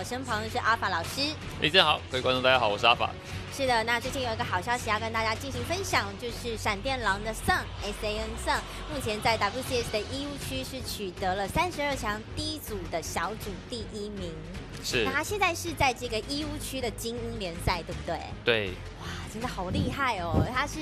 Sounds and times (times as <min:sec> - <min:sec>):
Music: 0:00.0 - 0:20.8
Speech: 0:03.6 - 0:18.8, 0:19.4 - 0:20.8.